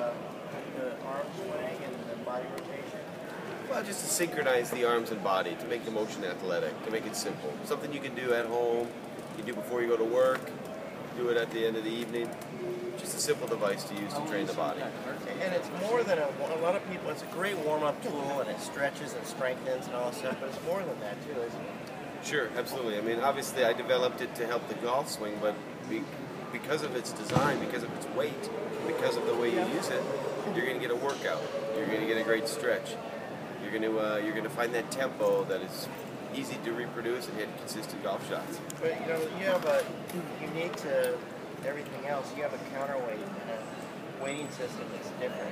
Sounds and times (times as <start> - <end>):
Speech: 0.0 - 10.5, 22.2 - 33.0.